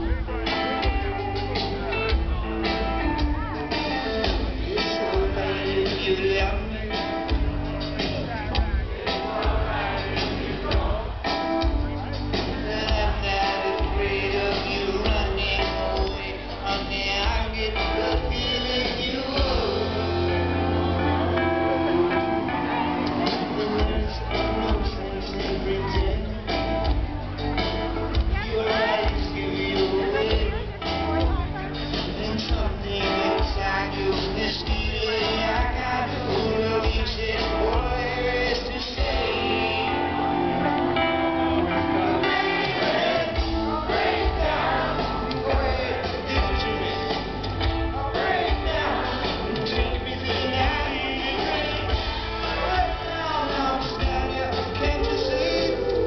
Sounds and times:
Speech: 0.0s - 20.0s, 20.8s - 40.2s
Music: 0.0s - 56.0s.

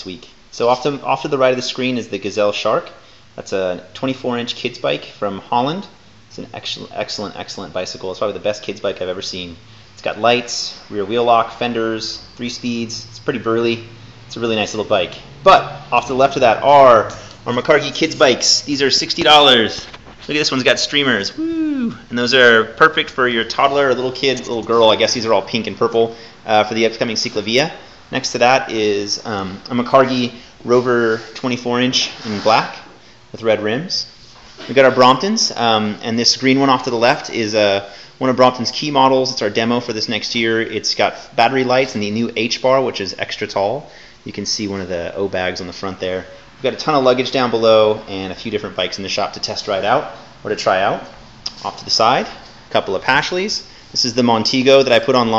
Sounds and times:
Speech: 0.0s - 55.3s.

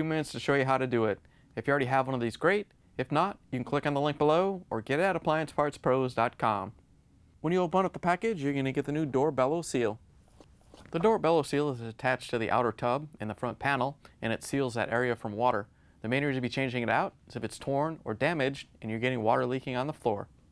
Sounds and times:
Speech: 0.0s - 6.8s, 7.4s - 10.0s, 10.9s - 20.3s.

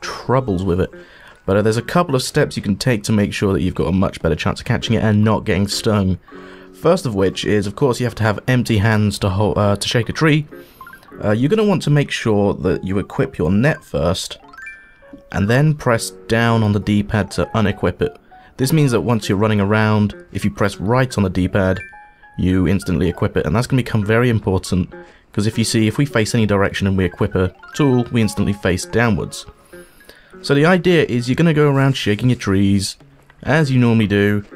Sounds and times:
Speech: 0.0s - 6.2s, 6.8s - 10.5s, 11.2s - 14.4s, 15.3s - 29.5s, 30.4s - 34.5s
Music: 0.0s - 34.5s.

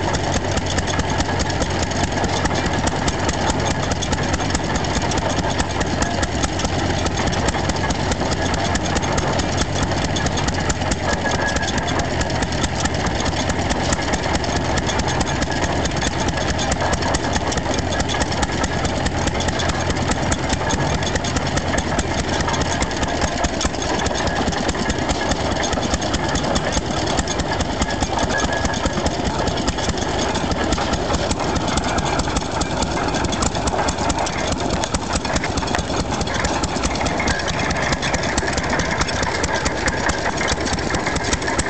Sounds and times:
Idling: 0.0s - 41.6s
Medium engine (mid frequency): 0.0s - 41.6s.

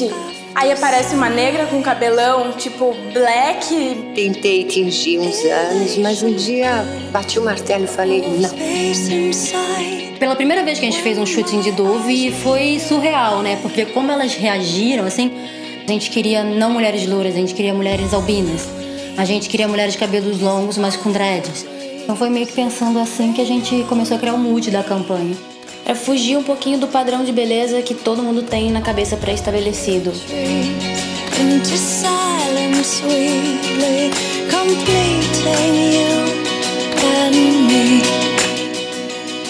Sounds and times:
Speech: 0.0s - 9.6s, 10.2s - 15.3s, 15.9s - 30.6s
Music: 0.0s - 39.4s.

